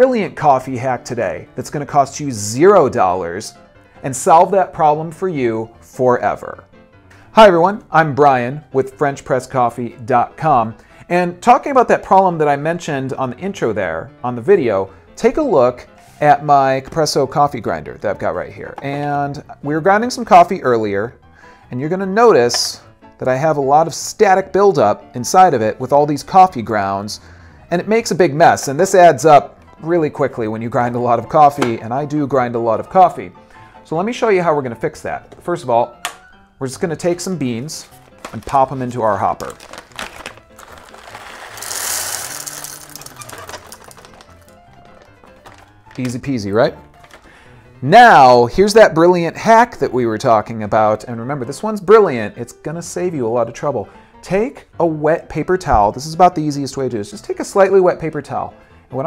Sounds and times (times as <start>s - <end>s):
Speech: 0.0s - 6.6s, 7.4s - 33.3s, 33.9s - 36.0s, 36.6s - 39.6s, 46.0s - 46.8s, 47.8s - 59.0s
Music: 0.0s - 59.0s.